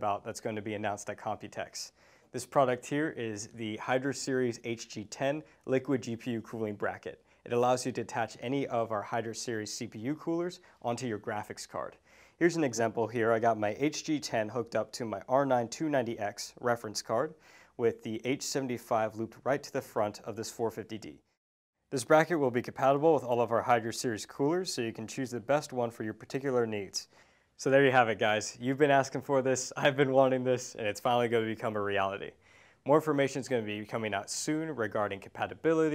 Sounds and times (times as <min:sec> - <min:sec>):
Speech: 0:00.0 - 0:21.3, 0:21.9 - 0:35.9.